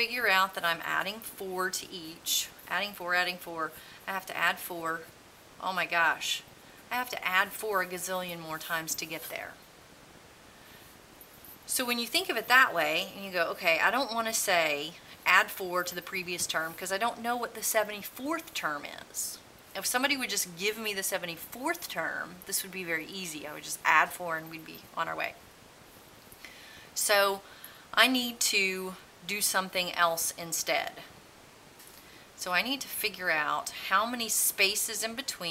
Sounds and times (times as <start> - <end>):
Speech: 0.0 - 9.6, 11.7 - 25.4, 27.0 - 27.4, 28.0 - 31.1, 32.4 - 35.5.